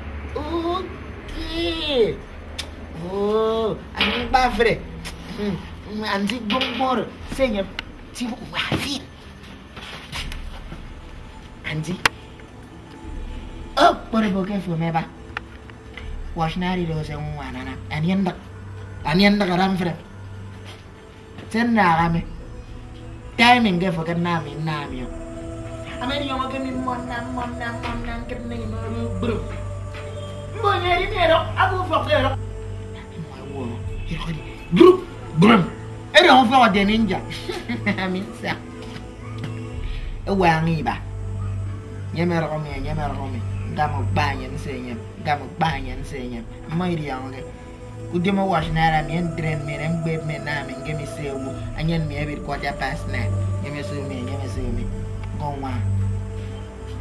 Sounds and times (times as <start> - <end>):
Music: 0.0 - 57.0
Outside, urban or manmade: 0.0 - 57.0
Speech: 30.6 - 32.4, 48.2 - 55.9.